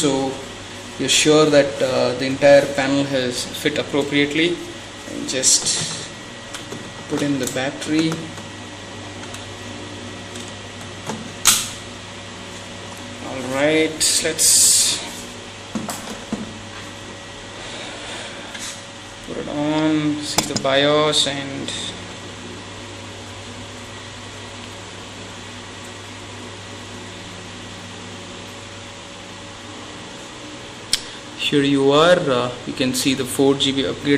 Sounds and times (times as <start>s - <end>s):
Speech: 0.0s - 0.4s, 1.0s - 6.1s, 7.1s - 8.3s, 13.2s - 15.2s, 19.3s - 22.0s, 31.4s - 34.1s.